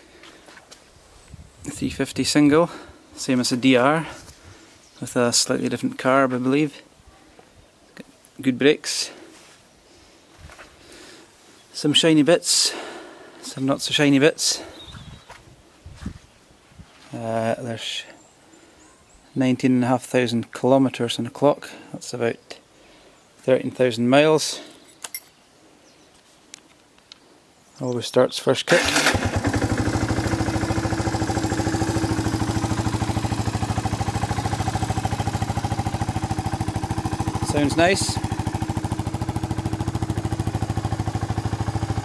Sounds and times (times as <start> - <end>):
Speech: 1.6 - 4.2, 5.0 - 7.4, 8.0 - 9.3, 11.8 - 14.7, 17.1 - 18.2, 19.4 - 22.6, 23.4 - 24.7, 27.8 - 28.8, 37.4 - 38.2.